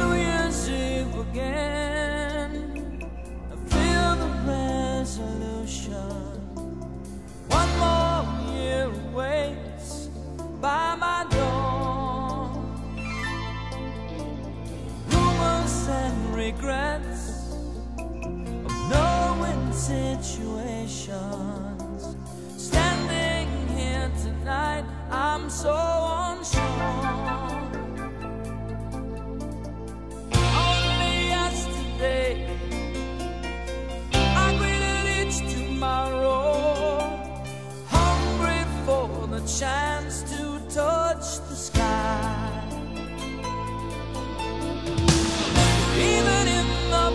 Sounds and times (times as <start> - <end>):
Music: 0.0 - 47.1.